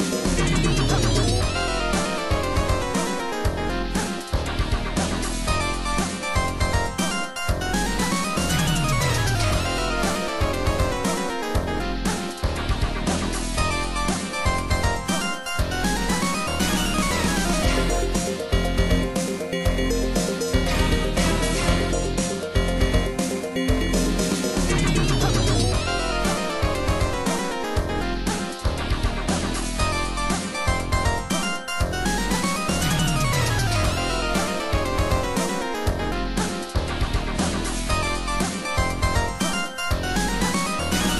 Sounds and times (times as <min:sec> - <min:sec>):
Soundtrack music: 0:00.0 - 0:41.1.